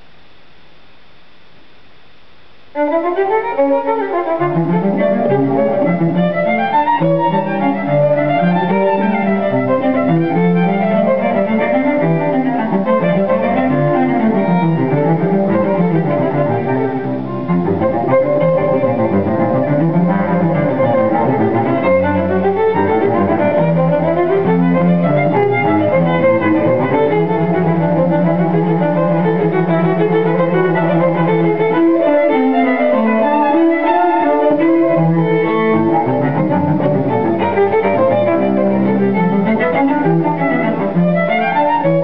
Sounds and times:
Cello: 2.7 - 42.0
Violin, fiddle: 2.8 - 42.0.

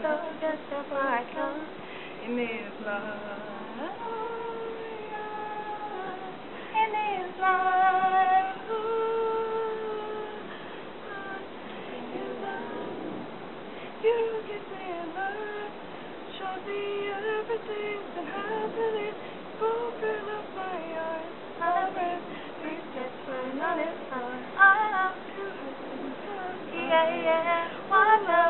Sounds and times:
Female singing: 0.0 - 13.2, 14.0 - 28.5.

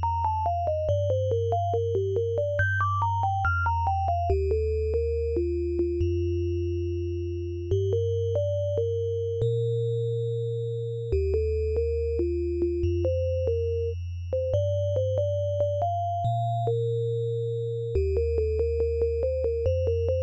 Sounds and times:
Music: 0.0 - 20.2.

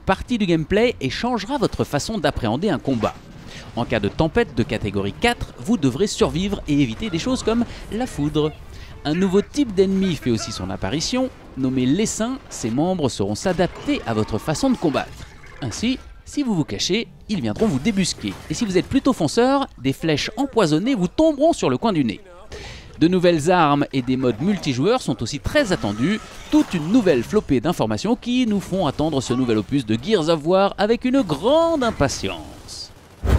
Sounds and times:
Speech: 0.0 - 32.9.

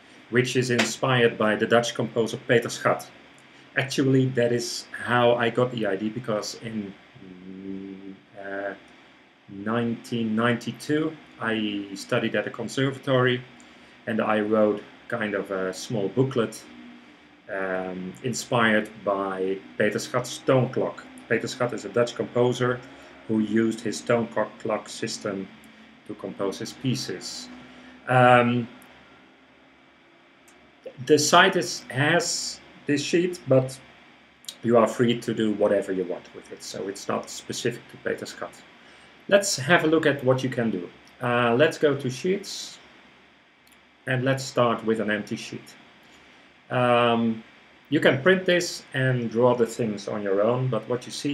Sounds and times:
Speech: 0.3 - 3.2, 3.8 - 8.8, 9.5 - 16.7, 17.5 - 28.8, 30.9 - 33.9, 34.5 - 38.6, 39.3 - 42.8, 44.1 - 45.8, 46.7 - 51.3.

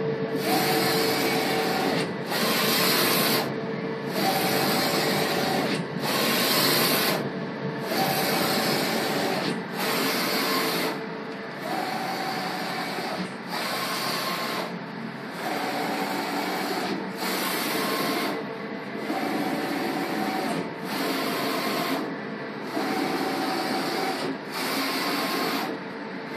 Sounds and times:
Printer: 0.0 - 26.3.

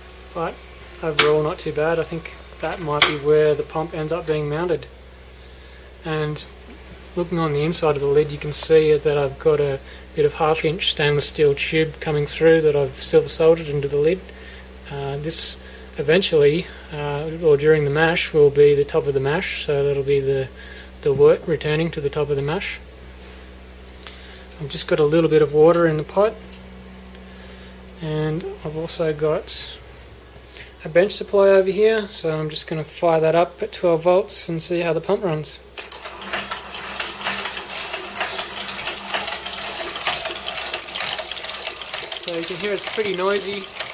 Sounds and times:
Speech: 0.4 - 4.9, 6.0 - 6.5, 7.2 - 14.3, 14.9 - 22.9, 24.6 - 26.4, 28.0 - 29.8, 30.8 - 35.6, 42.2 - 43.8.

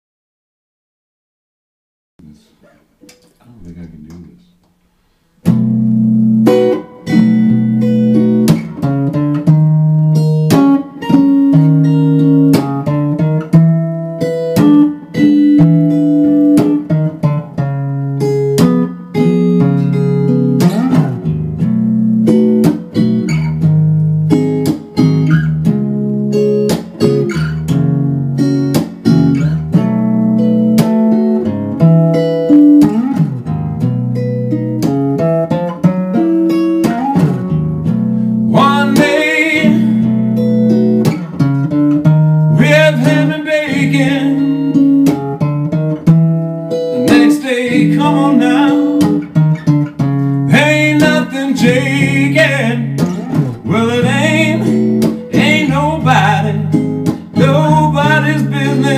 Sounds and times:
Music: 2.2 - 58.9.

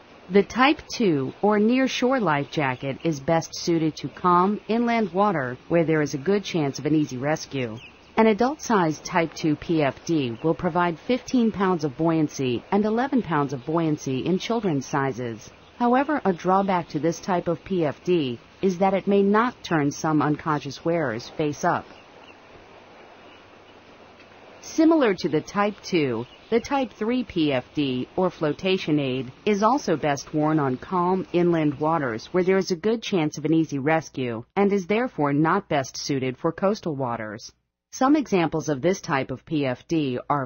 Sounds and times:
Speech: 0.3 - 21.9, 24.6 - 40.4.

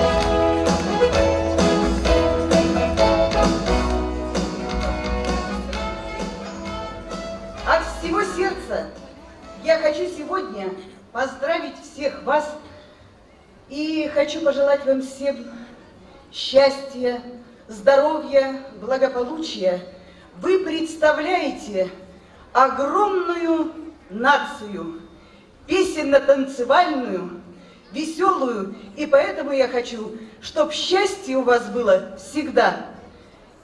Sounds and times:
Speech: 7.6 - 9.0, 9.6 - 12.8, 13.7 - 25.0, 25.7 - 33.2.

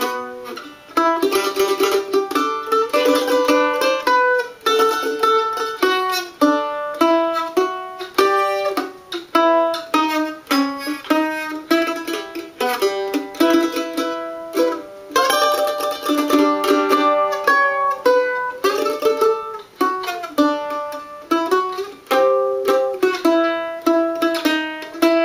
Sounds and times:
Traditional music: 0.0 - 25.2.

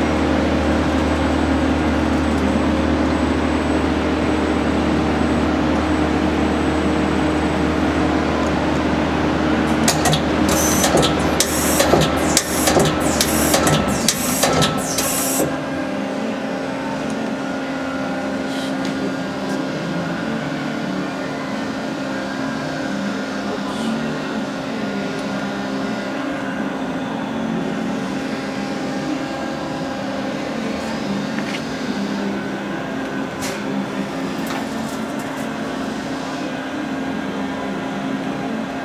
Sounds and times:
Tools: 9.9 - 15.5.

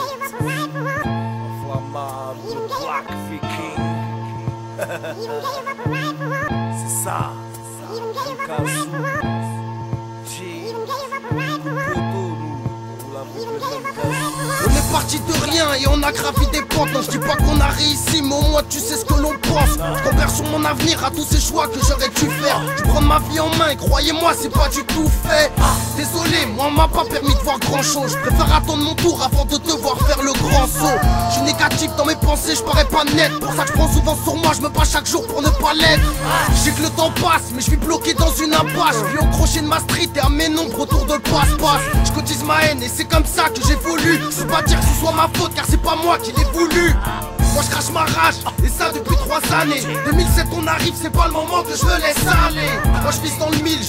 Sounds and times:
Music: 0.0 - 53.8.

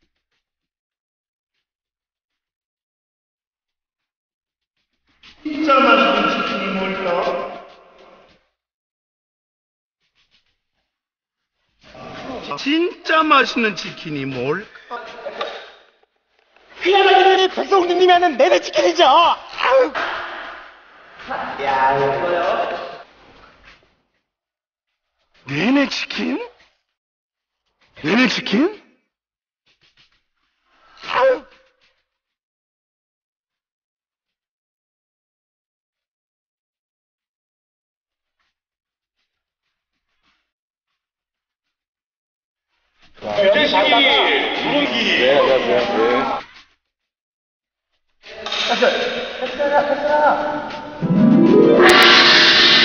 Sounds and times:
Speech: 5.5 - 7.7, 12.0 - 15.7, 16.8 - 20.0, 21.2 - 23.0, 25.5 - 26.6, 28.0 - 28.9, 43.2 - 46.4, 48.3 - 51.0.

